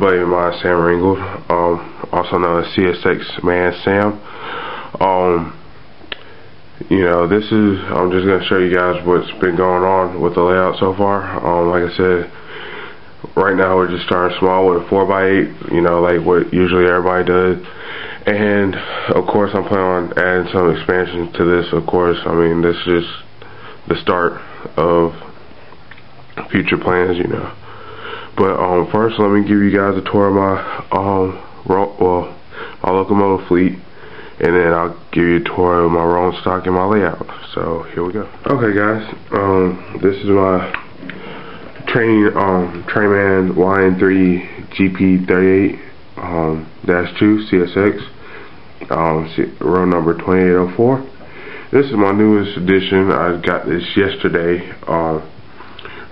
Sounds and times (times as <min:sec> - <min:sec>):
Speech: 0:00.0 - 0:04.3, 0:04.9 - 0:05.6, 0:06.8 - 0:12.4, 0:13.2 - 0:23.3, 0:23.9 - 0:25.4, 0:26.4 - 0:27.6, 0:28.4 - 0:33.8, 0:34.4 - 0:40.8, 0:41.7 - 0:48.2, 0:48.8 - 0:55.4.